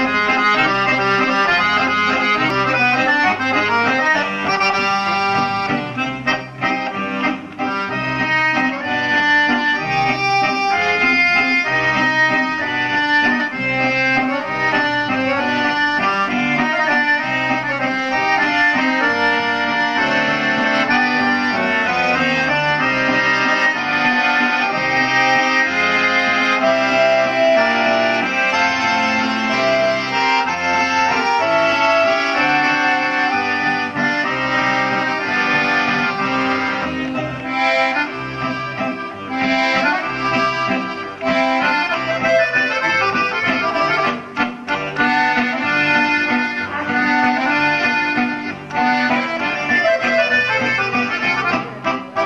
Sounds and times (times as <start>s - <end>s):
Accordion: 0.0s - 52.2s.